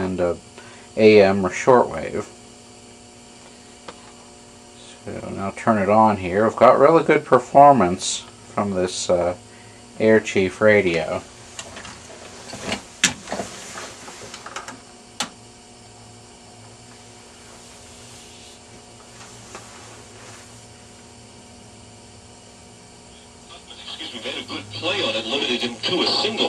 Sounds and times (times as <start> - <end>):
Speech: 0.0 - 0.4, 1.0 - 2.4, 4.8 - 9.4, 10.0 - 11.2, 23.5 - 26.4.